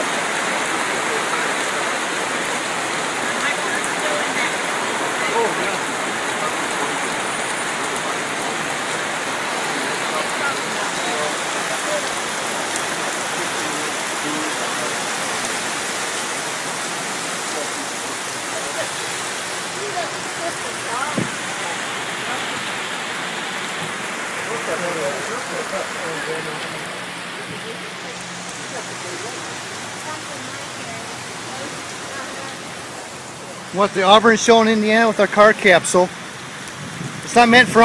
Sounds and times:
Rain: 0.0 - 37.8.

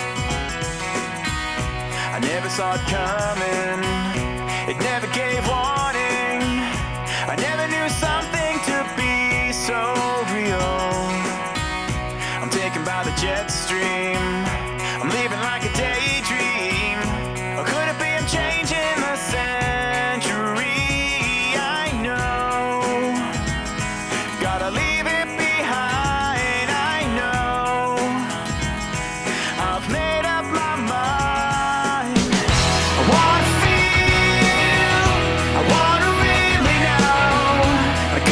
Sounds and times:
Music: 0.0 - 38.3.

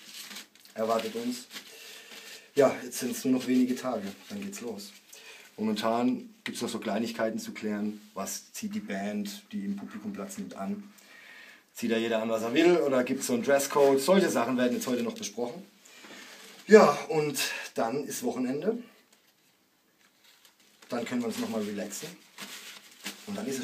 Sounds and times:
Speech: 0.7 - 1.5, 2.6 - 5.0, 5.6 - 10.9, 11.8 - 15.7, 16.7 - 19.0, 20.9 - 22.2, 23.2 - 23.6.

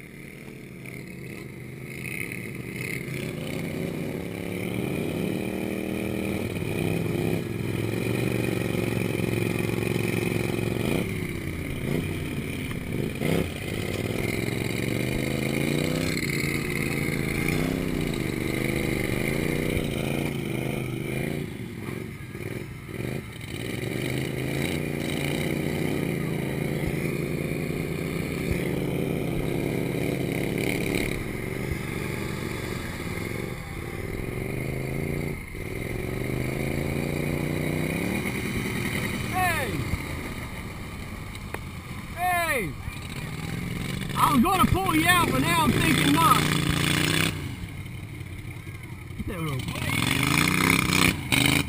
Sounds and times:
Vehicle: 0.0 - 51.6.

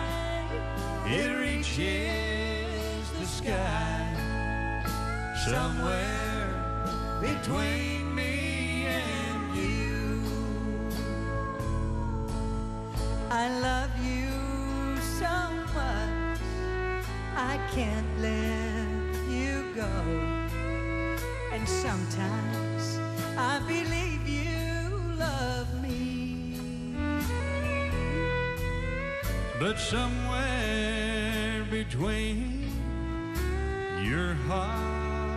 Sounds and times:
Singing: 0.0 - 4.6, 5.3 - 11.8
Country: 0.0 - 35.3.

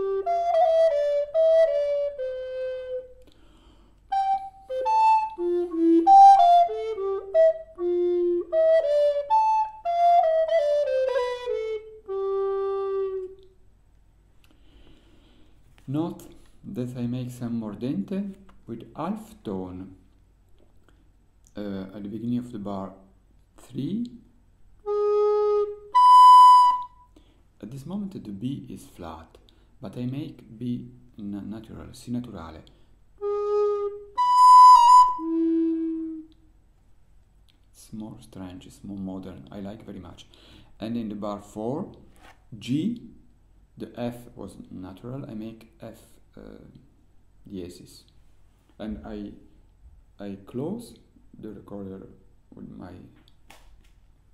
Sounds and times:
Flute: 0.0 - 3.3, 4.1 - 13.6, 24.8 - 27.1, 33.2 - 36.5.

